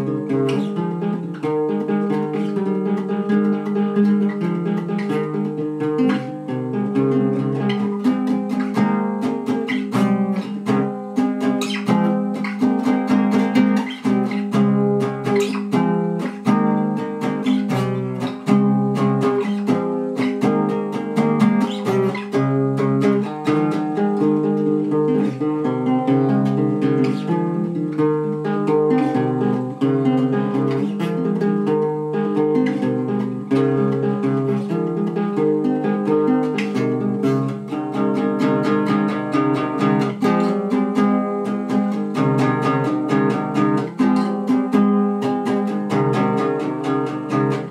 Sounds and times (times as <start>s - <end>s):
Strum: 0.0s - 47.7s.